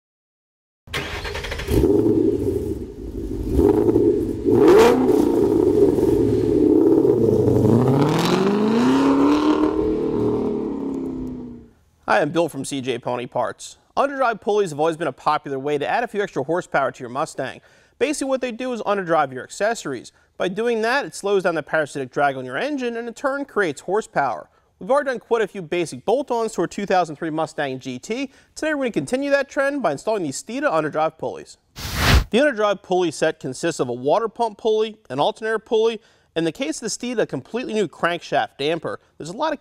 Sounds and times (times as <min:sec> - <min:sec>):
Engine: 0:00.9 - 0:11.7
Car: 0:01.0 - 0:11.7.